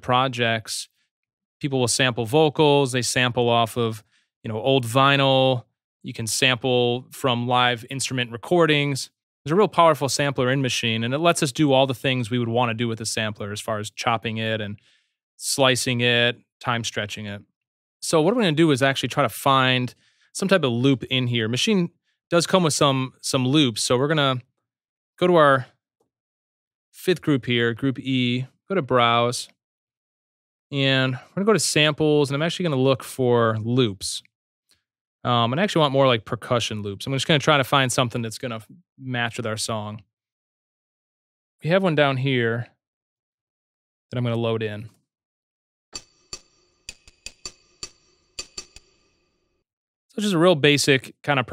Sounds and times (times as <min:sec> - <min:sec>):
Speech: 0:00.0 - 0:00.9, 0:01.6 - 0:14.8, 0:15.4 - 0:17.4, 0:18.0 - 0:24.4, 0:25.2 - 0:25.7, 0:27.0 - 0:29.6, 0:30.8 - 0:34.3, 0:35.3 - 0:40.0, 0:41.6 - 0:42.8, 0:44.1 - 0:45.0, 0:50.1 - 0:51.5.